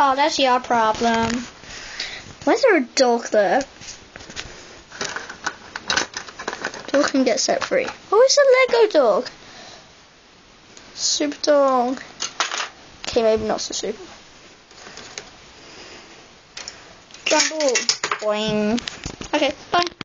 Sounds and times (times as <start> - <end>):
Speech: 0.0 - 1.5, 2.4 - 3.7, 6.9 - 9.4, 11.0 - 12.1, 13.1 - 14.1, 17.3 - 20.0.